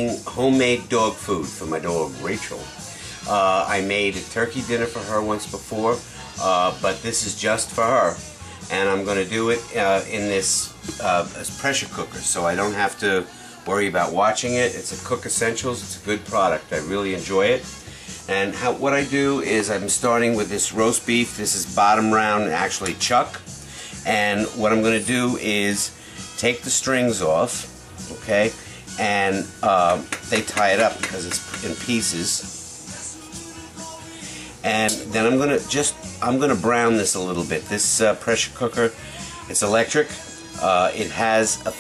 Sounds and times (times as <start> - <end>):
Speech: 0.0 - 17.7, 18.3 - 23.4, 24.1 - 32.5, 34.6 - 41.8
Music: 0.0 - 41.8.